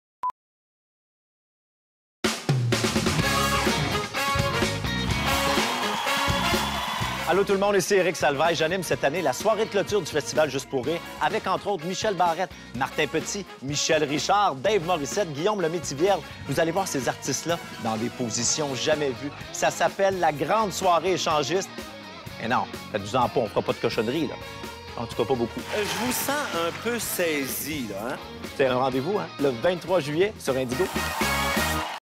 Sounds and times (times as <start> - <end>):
Music: 2.3 - 32.0
Speech: 7.3 - 21.7, 22.4 - 24.4, 25.0 - 30.9.